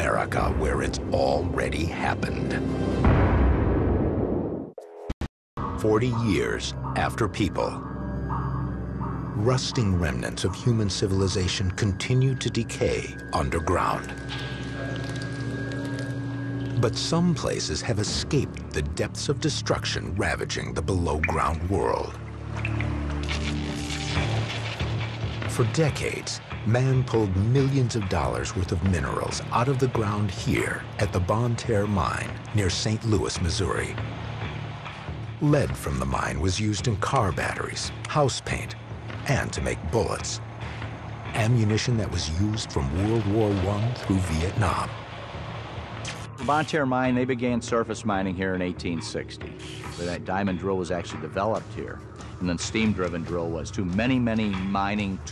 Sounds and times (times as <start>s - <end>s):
Speech: 0.0s - 2.6s, 5.8s - 7.8s, 9.4s - 14.1s, 16.8s - 22.2s, 25.5s - 34.0s, 35.4s - 40.4s, 41.3s - 45.0s, 46.4s - 55.3s
Music: 0.0s - 4.2s, 4.8s - 55.3s.